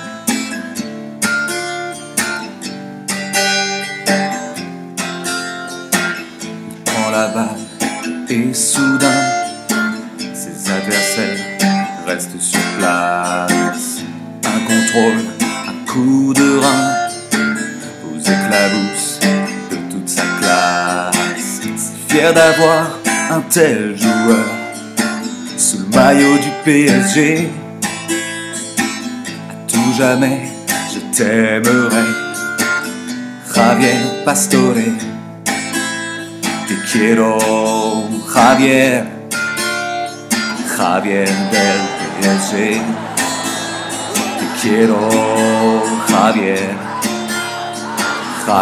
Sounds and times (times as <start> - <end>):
Music: 0.0 - 48.6.